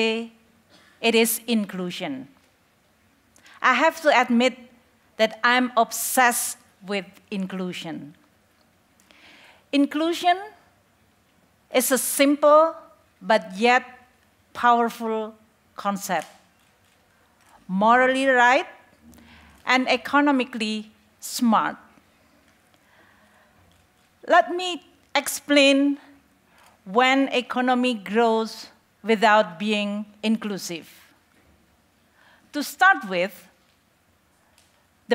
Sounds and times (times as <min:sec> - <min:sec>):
Speech: 0:01.0 - 0:02.3, 0:03.6 - 0:08.2, 0:09.8 - 0:10.6, 0:11.7 - 0:13.9, 0:14.6 - 0:16.4, 0:17.7 - 0:18.8, 0:19.7 - 0:21.9, 0:24.2 - 0:26.0, 0:26.9 - 0:31.1, 0:32.6 - 0:33.5.